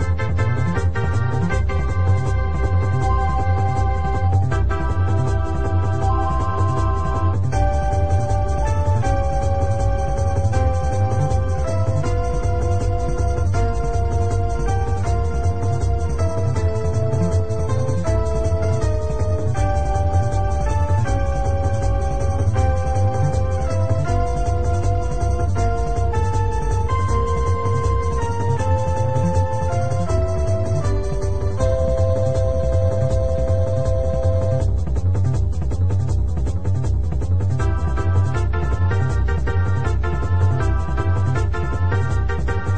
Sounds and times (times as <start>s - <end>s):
Music: 0.0s - 42.7s.